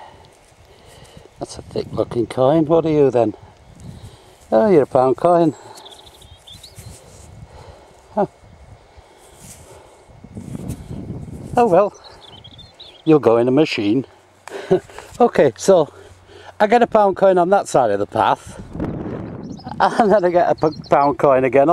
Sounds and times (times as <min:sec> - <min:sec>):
Speech: 0:01.4 - 0:03.4, 0:04.5 - 0:05.6, 0:11.6 - 0:12.0, 0:13.1 - 0:14.1, 0:15.2 - 0:16.0, 0:16.6 - 0:18.5, 0:19.8 - 0:21.7.